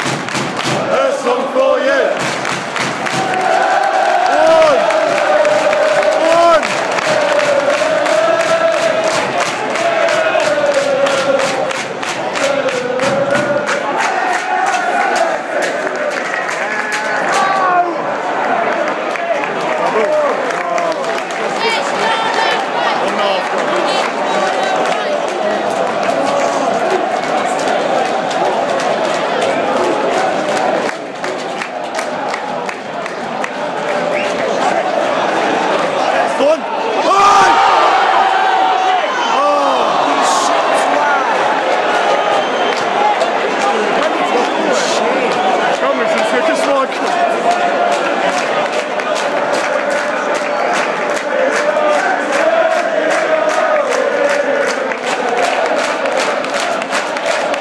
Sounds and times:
Crowd: 0.0 - 57.6
Speech: 43.6 - 47.1.

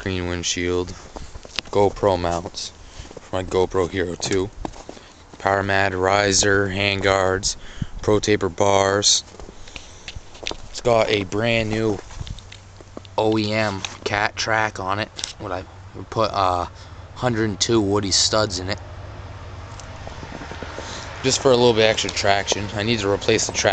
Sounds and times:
Speech: 0.0 - 1.0, 1.7 - 2.7, 3.3 - 4.5, 5.4 - 9.3, 10.8 - 12.0, 13.2 - 18.8, 21.2 - 23.7.

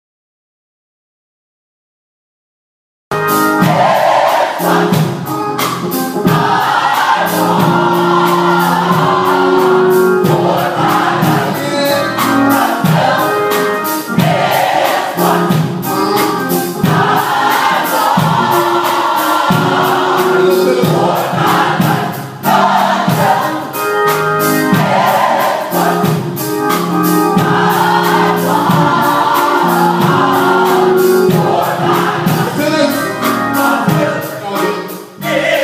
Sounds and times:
Choir: 3.6 - 5.2, 6.3 - 15.7, 16.8 - 23.8, 24.7 - 26.4, 27.4 - 33.0, 33.6 - 35.6.

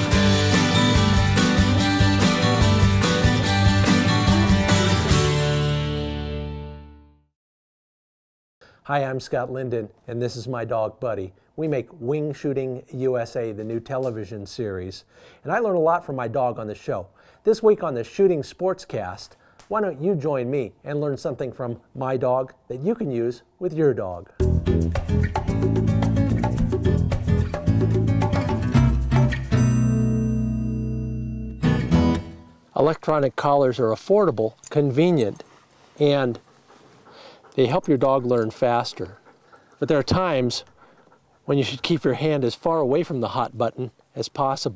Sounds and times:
Music: 0.0 - 7.3, 24.4 - 32.7
Speech: 8.9 - 24.3, 32.8 - 35.4, 36.0 - 36.4, 37.6 - 39.2, 39.8 - 40.7, 41.5 - 44.7.

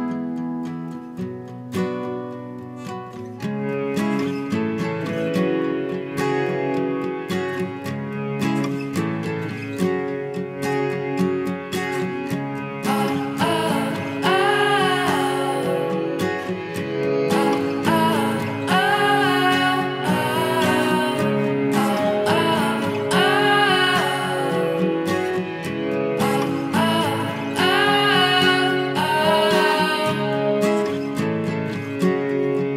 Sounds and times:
Music: 0.0 - 32.7.

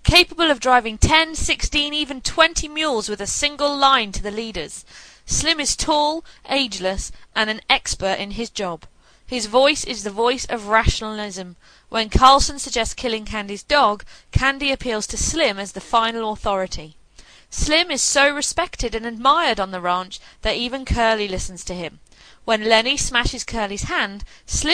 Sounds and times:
Speech: 0.0 - 24.7.

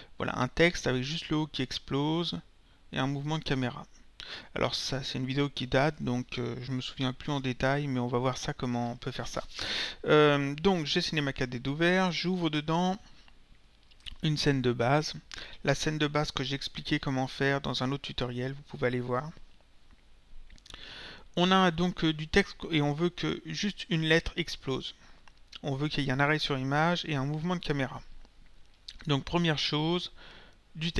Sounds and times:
Speech: 0.2 - 3.9, 4.6 - 13.1, 14.1 - 19.4, 21.4 - 25.0, 25.6 - 28.1, 28.9 - 30.2, 30.8 - 30.9.

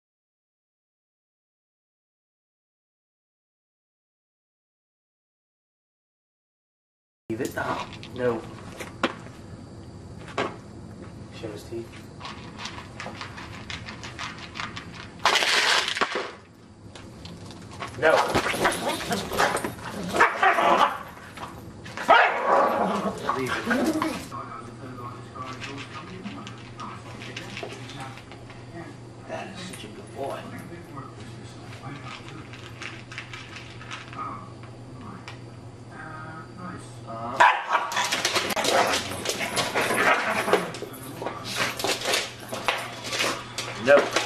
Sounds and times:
Speech: 7.3 - 8.5, 11.3 - 12.0, 23.2 - 32.6, 35.9 - 37.4, 43.8 - 44.2
Bow-wow: 18.6 - 21.1, 22.0 - 24.1, 37.4 - 40.6.

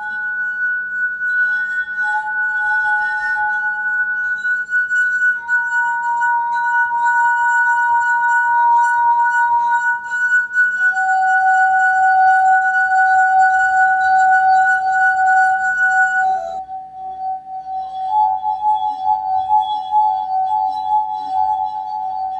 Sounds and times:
Music: 0.0 - 22.3.

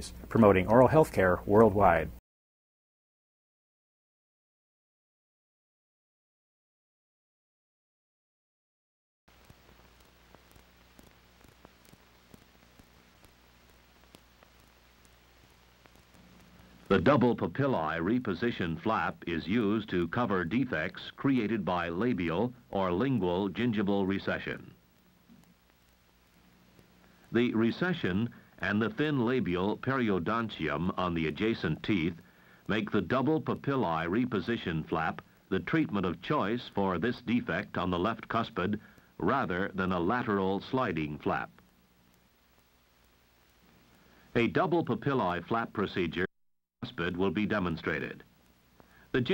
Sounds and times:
Speech: 0.0 - 2.2, 16.9 - 24.8, 27.3 - 41.6, 44.3 - 48.3, 49.1 - 49.3.

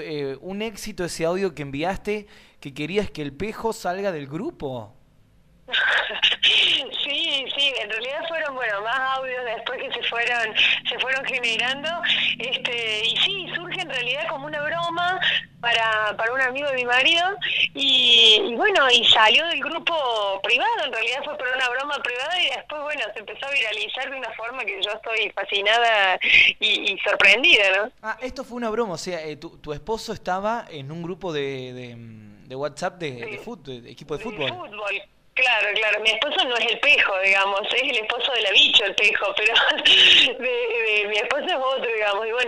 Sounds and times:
Radio: 5.7 - 27.9, 33.2 - 33.6, 34.2 - 42.4
Speech: 5.8 - 42.4.

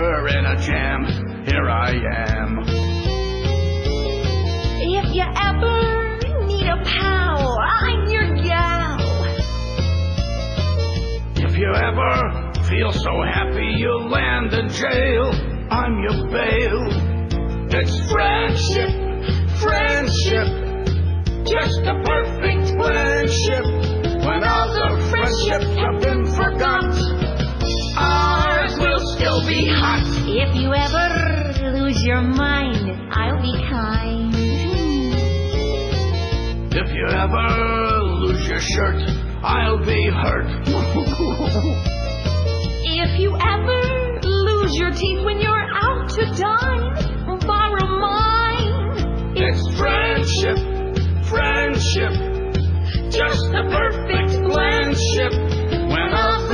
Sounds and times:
Music: 0.0 - 56.5.

